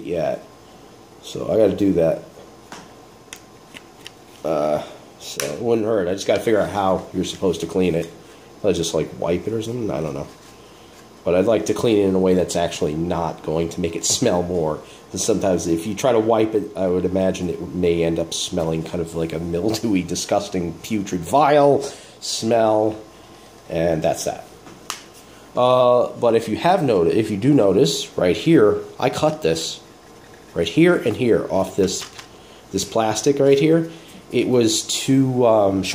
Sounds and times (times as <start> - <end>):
Speech: 0.0 - 0.5, 1.2 - 2.3, 4.4 - 10.4, 11.2 - 23.1, 23.7 - 24.6, 25.6 - 29.9, 30.5 - 35.9
Inside, small room: 0.0 - 35.9.